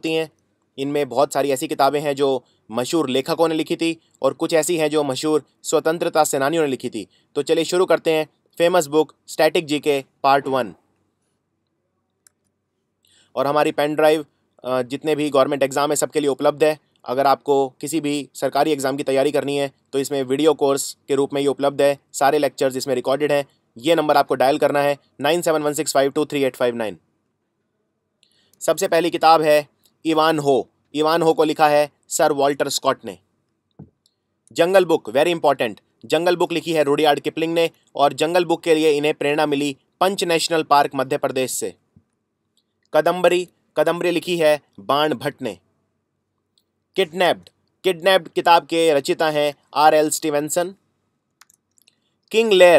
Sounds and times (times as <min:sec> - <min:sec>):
Speech: 0:00.0 - 0:10.8, 0:13.4 - 0:27.0, 0:28.6 - 0:33.2, 0:34.6 - 0:41.8, 0:43.0 - 0:45.6, 0:47.0 - 0:50.8, 0:52.3 - 0:52.7.